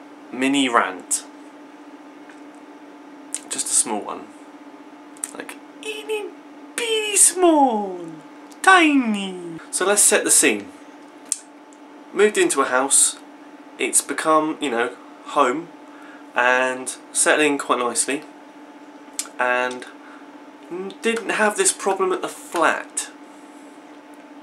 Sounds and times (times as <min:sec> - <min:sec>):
Speech: 0:00.3 - 0:01.3, 0:03.4 - 0:04.3, 0:05.2 - 0:10.7, 0:12.2 - 0:13.2, 0:13.8 - 0:15.7, 0:16.4 - 0:18.2, 0:19.4 - 0:19.9, 0:20.7 - 0:23.1.